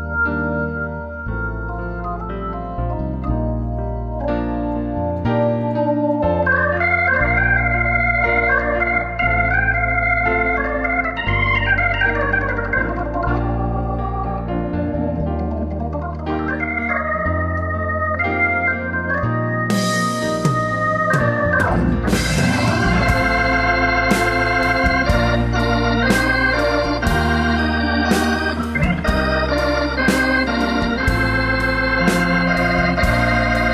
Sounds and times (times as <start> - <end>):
Hammond organ: 0.0 - 33.7.